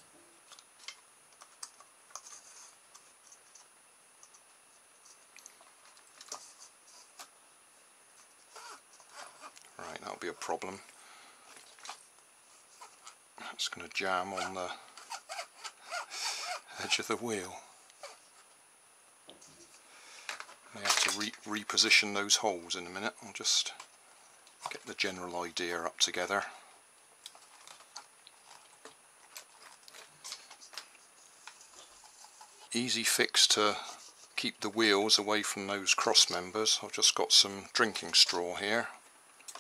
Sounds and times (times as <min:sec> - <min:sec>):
Inside, small room: 0:00.0 - 0:39.6
Speech: 0:09.8 - 0:10.9, 0:13.4 - 0:14.9, 0:16.7 - 0:17.7, 0:20.7 - 0:23.8, 0:24.6 - 0:26.7, 0:32.7 - 0:39.0.